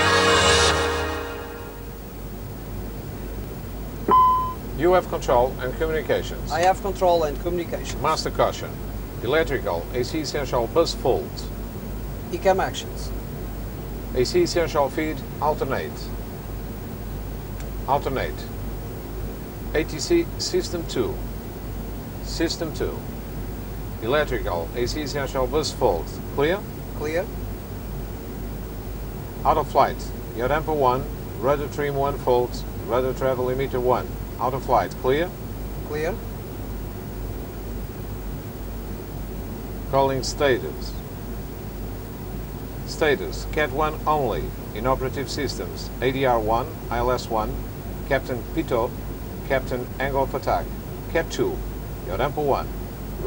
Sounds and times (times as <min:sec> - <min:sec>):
Speech: 0:04.8 - 0:11.6, 0:12.3 - 0:13.2, 0:14.1 - 0:16.2, 0:17.9 - 0:18.6, 0:19.7 - 0:21.2, 0:22.2 - 0:23.1, 0:24.0 - 0:27.3, 0:29.4 - 0:36.2, 0:39.9 - 0:41.0, 0:42.9 - 0:53.2.